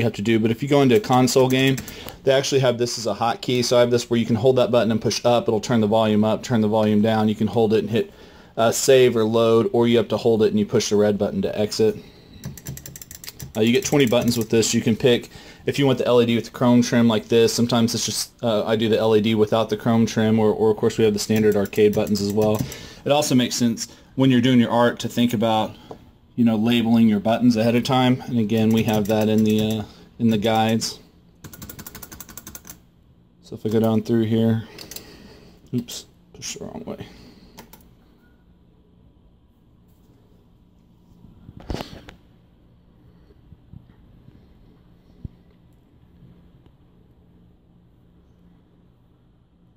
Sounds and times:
Speech: 0.0s - 12.1s, 13.5s - 25.8s, 26.4s - 31.1s, 33.4s - 34.7s, 35.7s - 37.2s
Inside, small room: 0.0s - 49.7s
Typewriter: 12.4s - 14.5s, 31.4s - 32.8s.

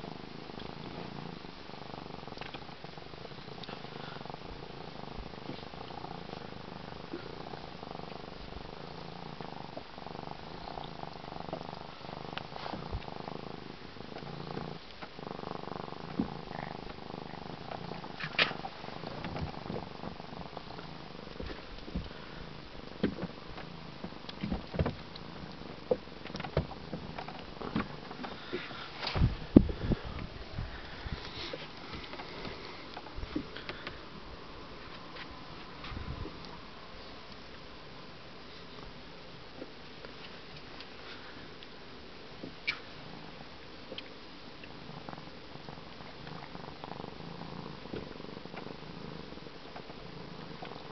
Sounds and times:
Purr: 0.0s - 50.9s.

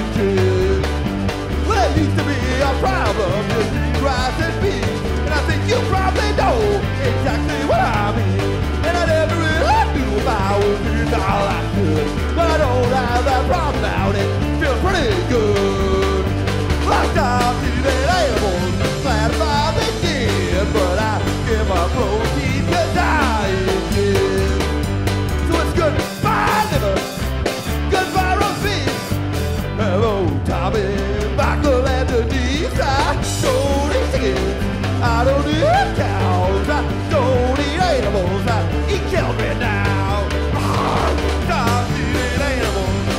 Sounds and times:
Music: 0.0s - 43.1s.

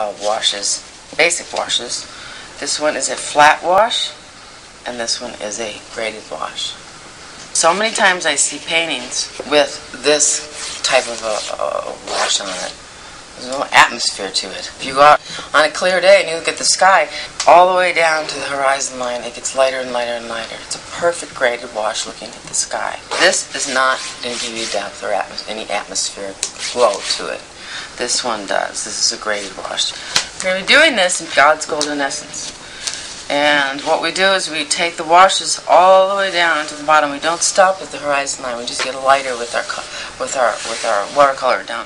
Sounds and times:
Speech: 0.0s - 4.2s, 4.8s - 6.8s, 7.6s - 12.8s, 13.4s - 32.6s, 33.3s - 41.8s
Inside, small room: 0.0s - 41.8s.

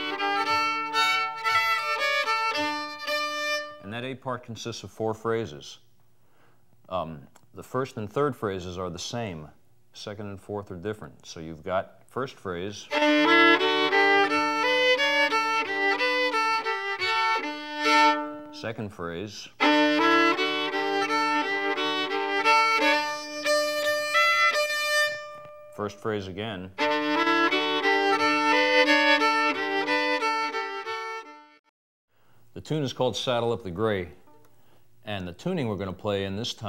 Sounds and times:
Violin, fiddle: 0.0s - 3.8s, 12.9s - 18.6s, 19.6s - 25.8s, 26.8s - 31.7s
Speech: 3.8s - 5.9s, 6.9s - 12.9s, 18.6s - 19.6s, 25.8s - 26.8s, 32.6s - 34.2s, 35.0s - 36.6s.

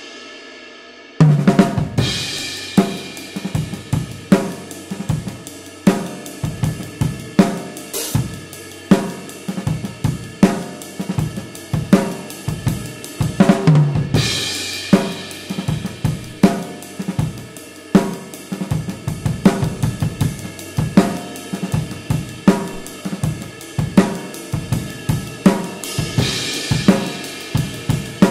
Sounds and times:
Cymbal: 0.0s - 28.3s.

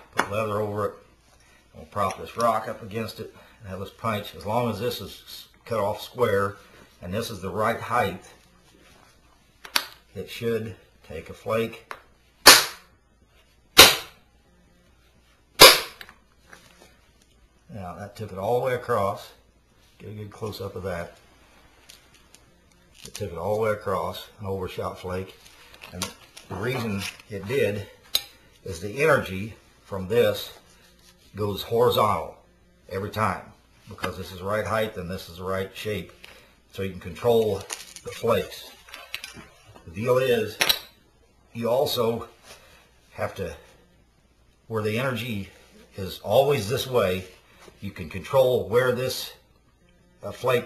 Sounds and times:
Speech: 0.2s - 1.0s, 1.7s - 8.3s, 10.1s - 11.9s, 17.7s - 19.4s, 20.0s - 21.2s, 23.1s - 28.0s, 28.6s - 30.6s, 31.3s - 38.8s, 39.8s - 40.6s, 41.5s - 42.4s, 43.1s - 43.7s, 44.7s - 49.4s, 50.2s - 50.6s.

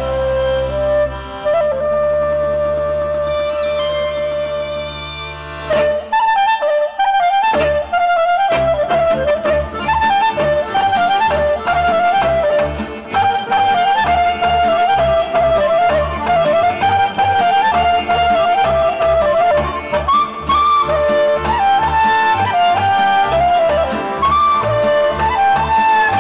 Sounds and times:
Folk music: 0.0s - 26.2s.

